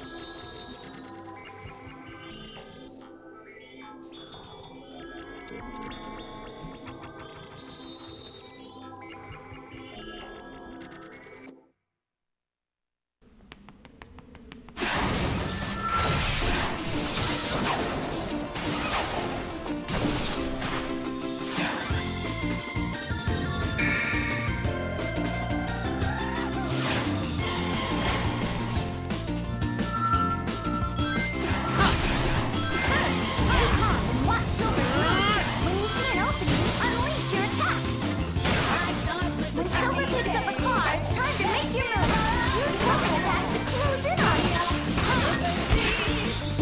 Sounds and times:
Music: 0.0s - 11.8s, 13.5s - 46.6s.

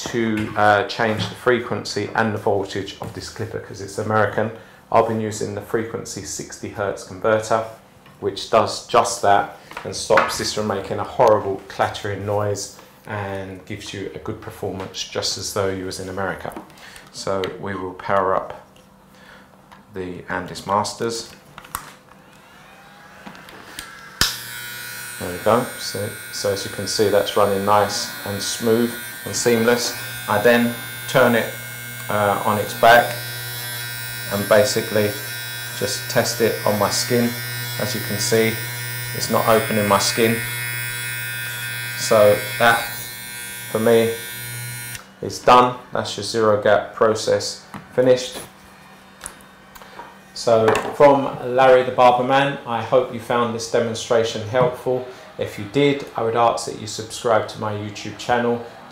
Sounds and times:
Speech: 0.0s - 18.7s, 19.9s - 21.4s, 25.2s - 33.2s, 34.3s - 40.6s, 42.0s - 43.0s, 43.7s - 44.3s, 45.2s - 48.5s, 50.4s - 58.9s
Electric shaver, electric razor: 22.2s - 45.8s, 48.5s - 50.4s.

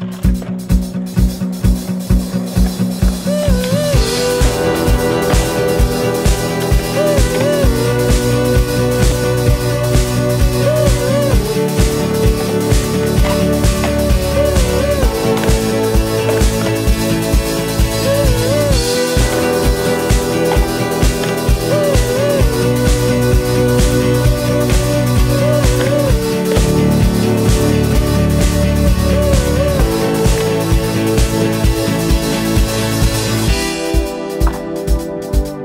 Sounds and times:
Skateboard: 0.0s - 28.6s
Music: 0.0s - 35.6s.

